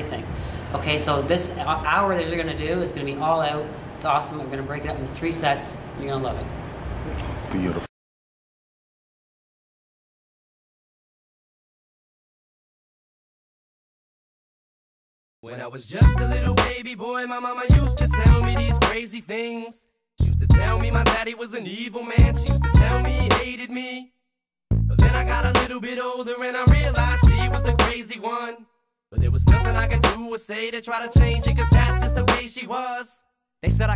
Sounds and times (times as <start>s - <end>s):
Hip hop music: 15.8s - 19.5s, 20.2s - 23.9s, 24.9s - 28.6s, 29.2s - 33.9s.